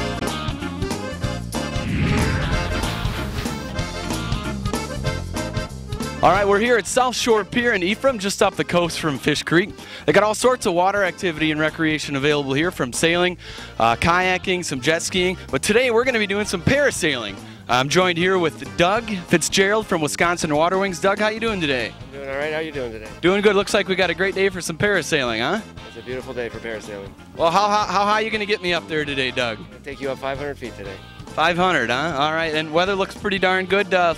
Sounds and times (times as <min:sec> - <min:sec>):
Music: 0:00.0 - 0:34.1
Speech: 0:06.2 - 0:34.1.